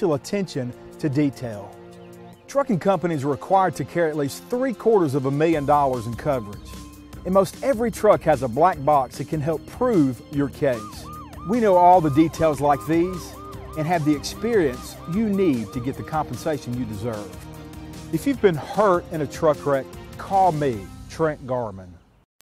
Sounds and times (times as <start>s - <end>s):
Speech: 0.0s - 1.7s, 2.5s - 6.7s, 7.3s - 17.4s, 18.2s - 22.0s
Music: 0.0s - 22.0s.